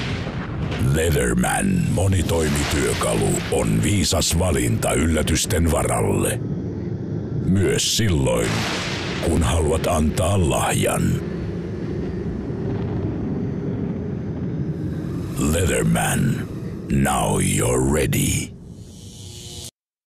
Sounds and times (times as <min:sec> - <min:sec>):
Speech: 0:00.8 - 0:06.4, 0:07.4 - 0:08.6, 0:09.2 - 0:11.2, 0:15.4 - 0:18.5.